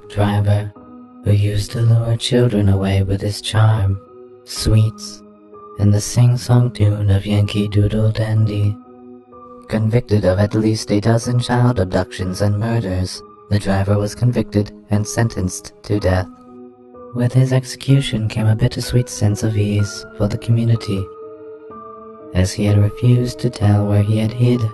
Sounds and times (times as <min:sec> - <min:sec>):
Speech: 0:00.0 - 0:05.2, 0:05.8 - 0:08.8, 0:09.7 - 0:16.4, 0:17.2 - 0:21.1, 0:22.4 - 0:24.7
Music: 0:00.0 - 0:24.7.